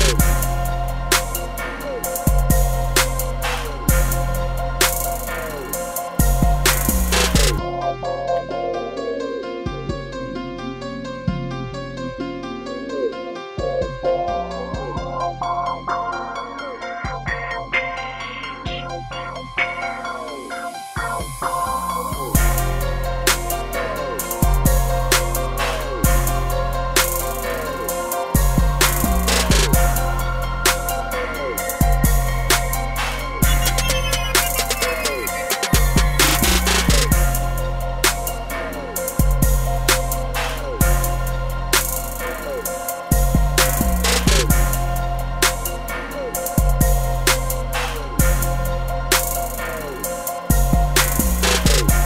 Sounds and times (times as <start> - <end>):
Synthesizer: 0.0 - 52.0.